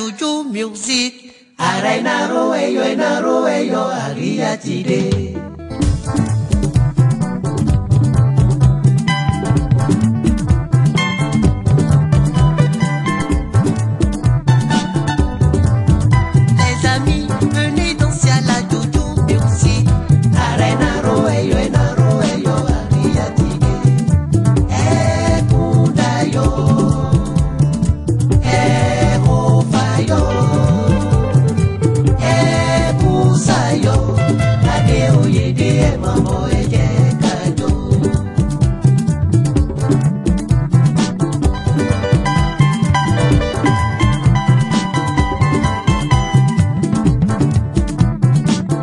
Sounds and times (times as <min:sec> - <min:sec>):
Dance music: 0:01.6 - 0:48.8
Traditional music: 0:05.0 - 0:48.8.